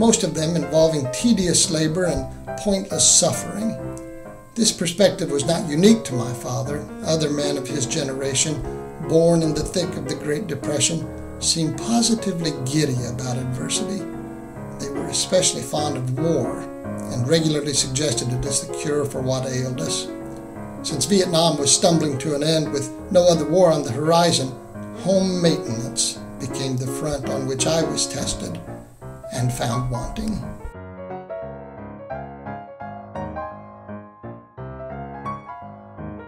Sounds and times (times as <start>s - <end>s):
Speech: 0.0s - 3.8s, 4.6s - 14.0s, 14.8s - 20.1s, 20.8s - 28.6s, 29.3s - 30.6s
Music: 0.0s - 36.2s.